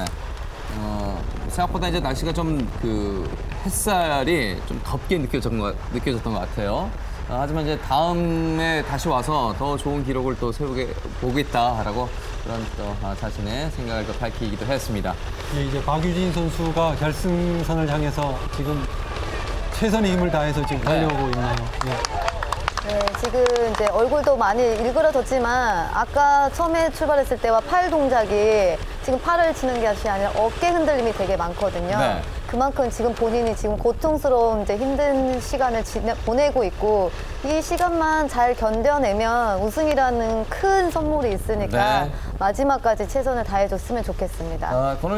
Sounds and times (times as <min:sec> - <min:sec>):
Outside, urban or manmade: 0:00.0 - 0:45.1
Run: 0:11.6 - 0:25.4.